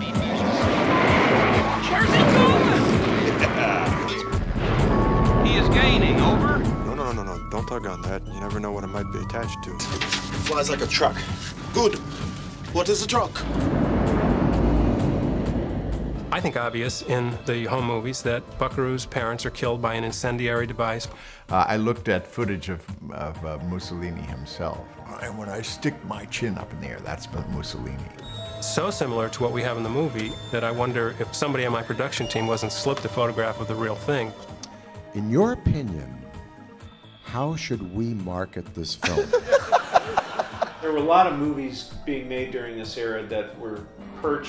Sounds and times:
Music: 0.0 - 44.4
Speech: 5.5 - 9.8, 16.4 - 34.3, 37.3 - 39.3, 40.8 - 44.4.

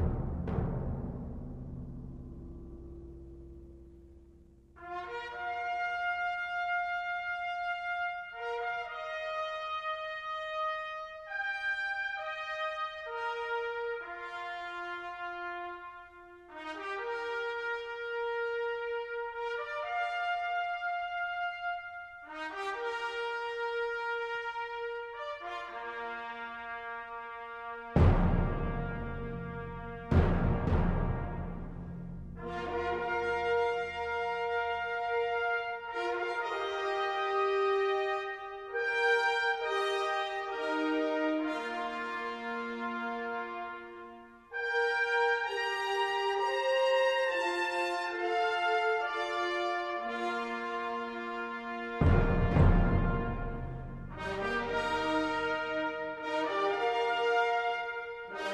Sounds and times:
French horn: 4.7 - 58.5.

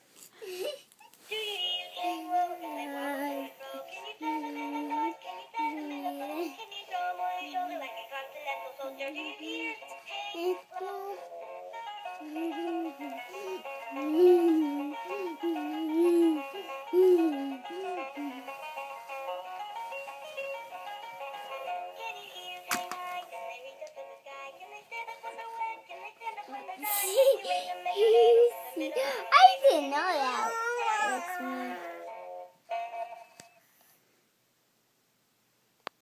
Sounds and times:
Synthetic singing: 1.3 - 11.3, 21.6 - 29.0
Music: 1.3 - 33.8
Speech: 28.9 - 32.0.

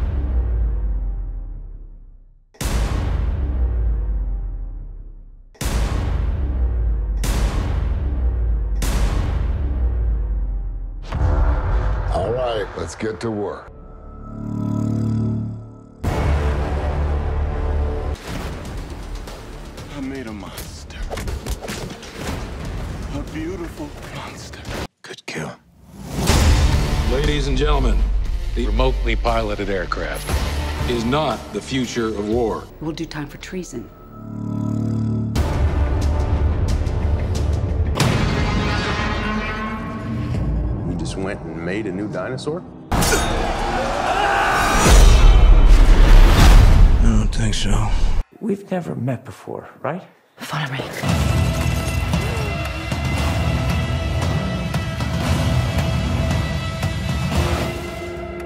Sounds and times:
Music: 0.0 - 24.4, 26.1 - 34.6, 35.3 - 47.0, 50.9 - 58.4.

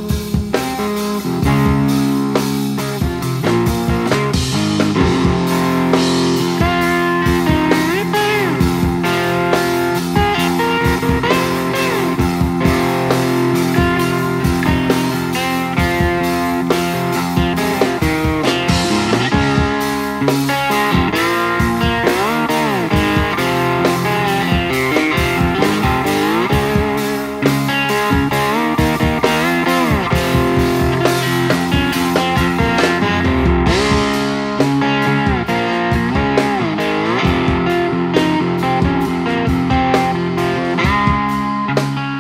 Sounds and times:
Guitar: 0.0 - 42.2.

